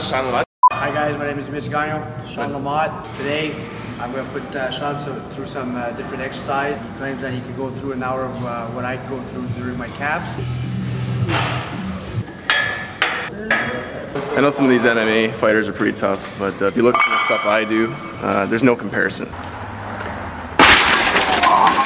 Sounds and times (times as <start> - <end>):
Speech: 13.4 - 19.3.